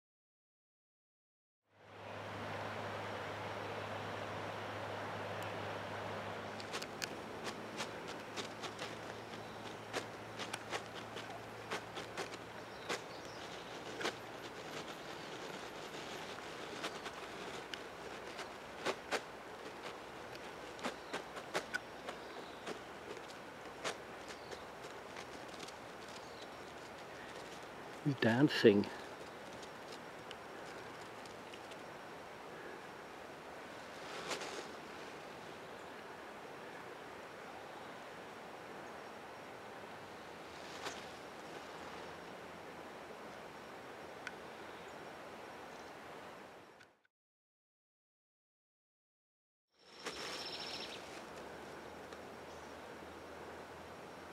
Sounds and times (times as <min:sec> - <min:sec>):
Speech: 0:28.1 - 0:29.1.